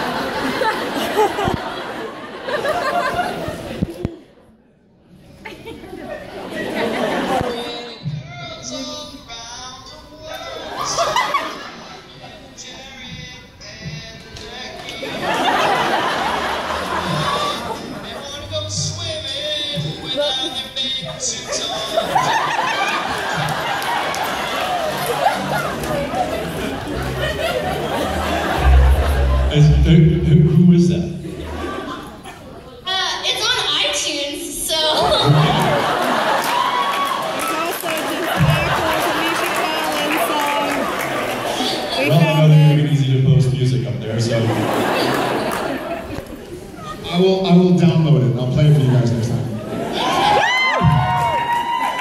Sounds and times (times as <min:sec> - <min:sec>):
Singing: 0:12.2 - 0:15.2.